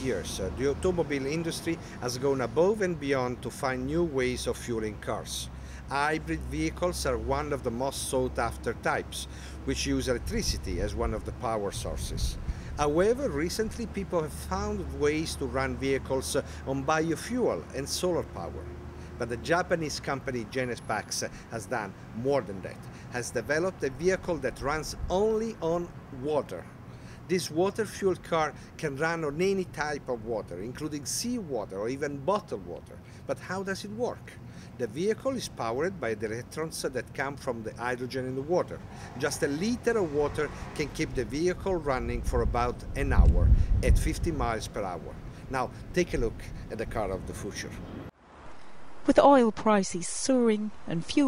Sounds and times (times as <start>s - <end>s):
Speech: 0.0s - 18.6s, 19.2s - 26.7s, 27.3s - 47.8s, 49.1s - 51.2s.